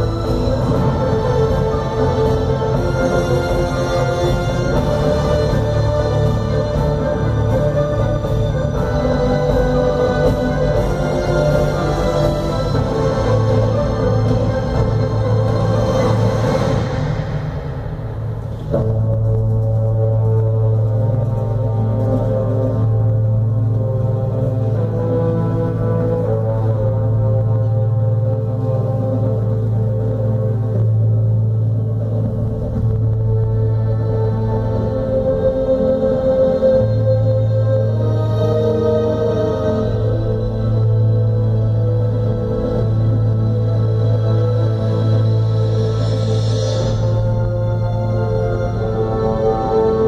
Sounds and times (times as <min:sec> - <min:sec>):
Inside, large room or hall: 0:00.0 - 0:50.0
Music: 0:00.0 - 0:50.0.